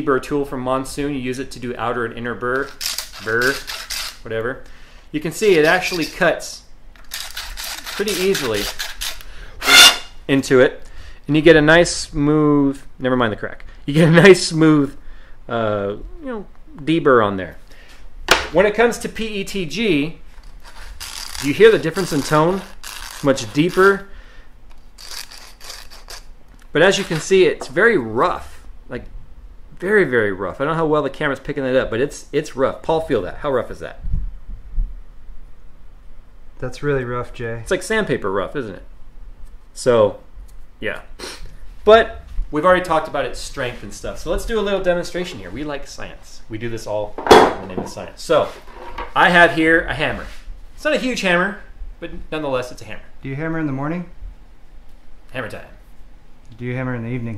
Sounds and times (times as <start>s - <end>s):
Speech: 0.0s - 6.7s, 8.0s - 8.8s, 10.3s - 17.6s, 18.5s - 20.2s, 21.4s - 24.1s, 26.7s - 29.1s, 29.8s - 34.0s, 36.6s - 38.9s, 39.8s - 41.1s, 41.8s - 48.6s, 49.2s - 54.2s, 55.3s - 55.8s, 56.5s - 57.3s.